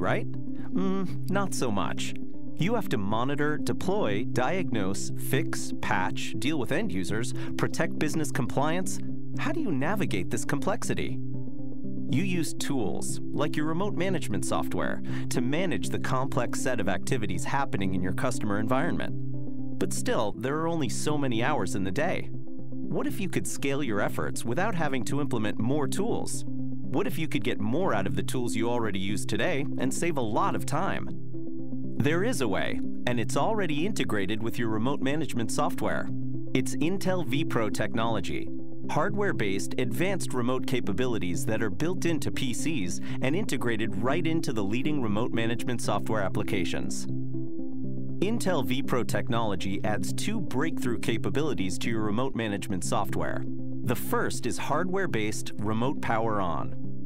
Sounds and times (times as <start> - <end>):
Speech: 0.0 - 11.2, 12.1 - 19.1, 19.8 - 22.3, 22.9 - 26.4, 27.0 - 31.1, 32.0 - 47.1, 48.2 - 56.8
Music: 0.0 - 57.0.